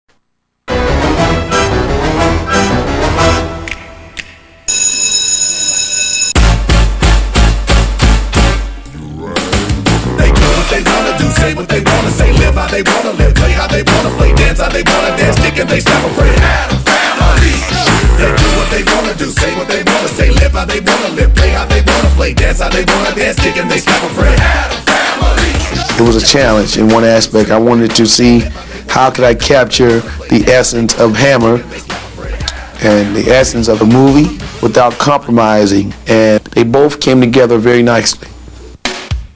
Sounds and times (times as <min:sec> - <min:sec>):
Music: 0:00.7 - 0:04.7, 0:06.3 - 0:36.2, 0:38.6 - 0:39.3.